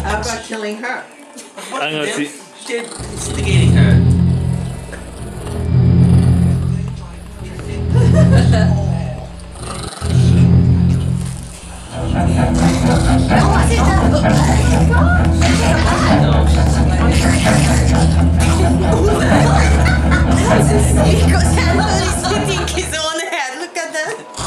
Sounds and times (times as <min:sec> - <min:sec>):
Speech: 0:00.0 - 0:04.2, 0:06.4 - 0:10.7, 0:11.5 - 0:24.4
Music: 0:00.0 - 0:24.4.